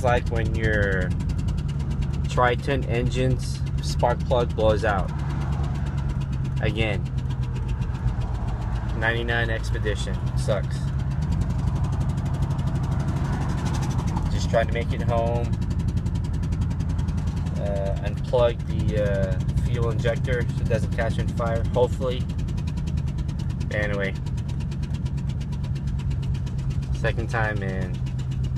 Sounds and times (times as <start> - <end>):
Speech: 0.0 - 1.1, 2.3 - 5.1, 6.6 - 7.0, 9.0 - 10.8, 14.4 - 15.5, 17.6 - 22.2, 23.7 - 24.2, 27.0 - 28.0
Car: 0.0 - 28.5.